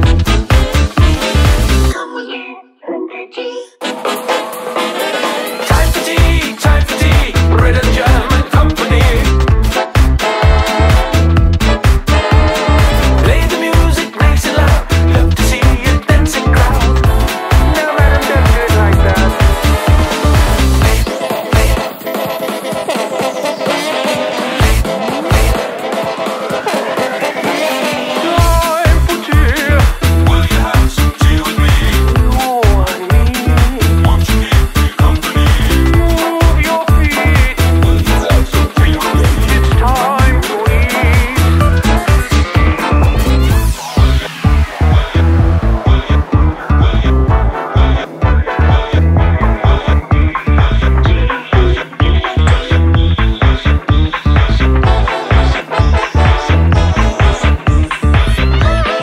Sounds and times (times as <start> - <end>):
Disco: 0.0 - 2.5, 3.8 - 59.0.